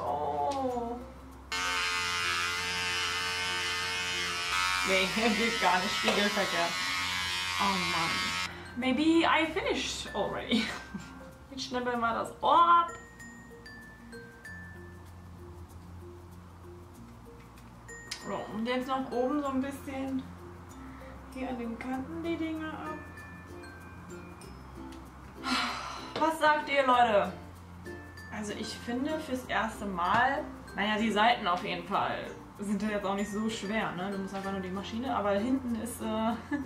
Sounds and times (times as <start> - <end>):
Music: 0.0 - 36.6
Electric shaver, electric razor: 1.5 - 8.6.